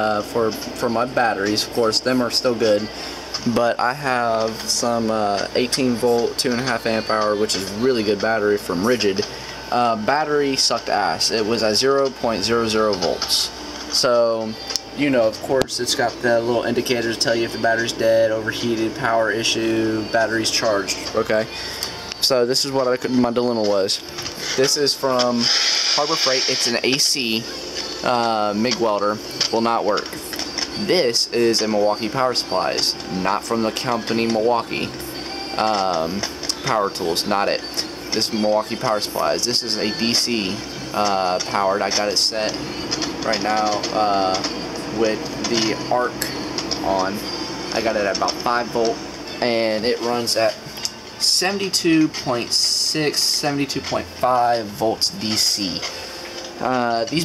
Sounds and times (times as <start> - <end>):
Speech: 0.0 - 21.6, 22.2 - 30.2, 30.8 - 35.0, 35.6 - 42.6, 43.2 - 50.6, 51.2 - 55.9, 56.6 - 57.2
Music: 0.0 - 57.2.